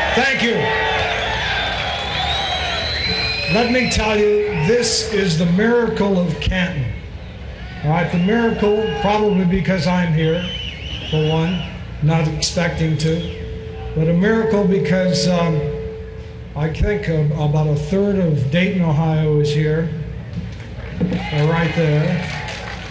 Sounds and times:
Male speech, man speaking: 0.1s - 0.7s, 3.5s - 7.0s, 7.8s - 13.4s, 14.0s - 15.8s, 16.6s - 20.1s, 21.2s - 22.4s.

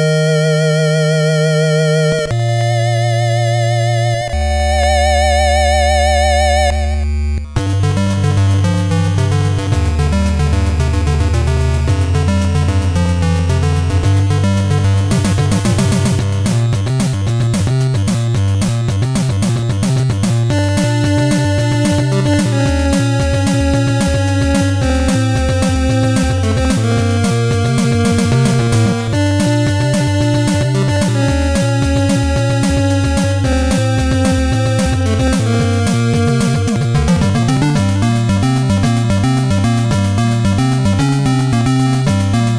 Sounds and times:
Background music: 0.0s - 42.5s.

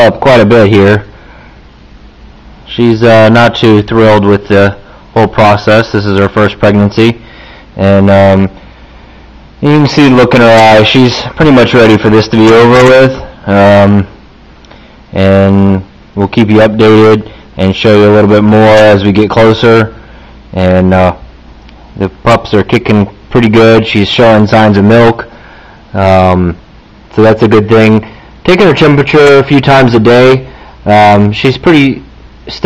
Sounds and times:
Speech: 0.0s - 1.1s, 2.7s - 7.2s, 7.8s - 8.6s, 9.6s - 14.2s, 15.1s - 21.2s, 22.0s - 25.3s, 25.9s - 32.6s.

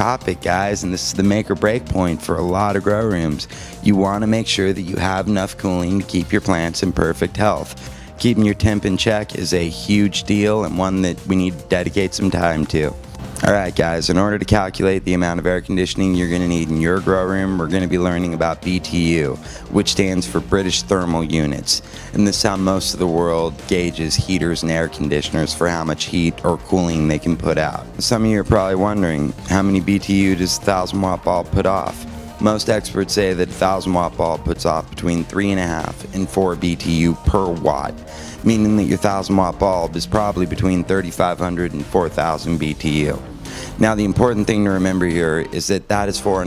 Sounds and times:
Speech: 0.0s - 43.2s, 43.8s - 46.4s
Music: 0.0s - 46.4s.

